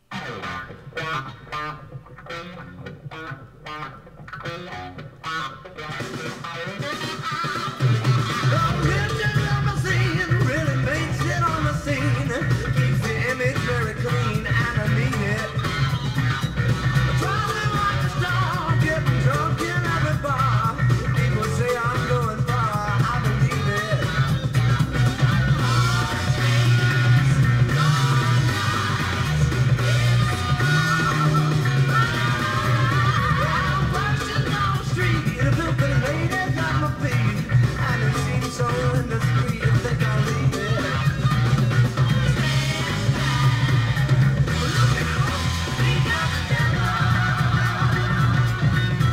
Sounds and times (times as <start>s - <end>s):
Music: 0.0s - 49.1s.